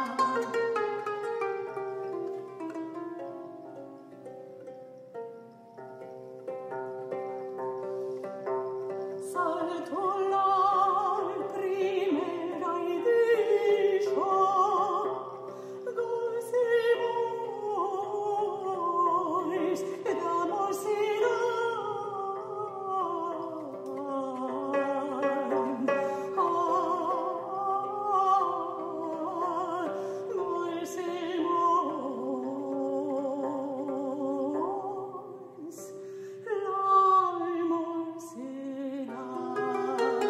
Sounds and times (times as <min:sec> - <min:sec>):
Harp: 0:00.0 - 0:40.3
Plucked string instrument: 0:00.0 - 0:40.3.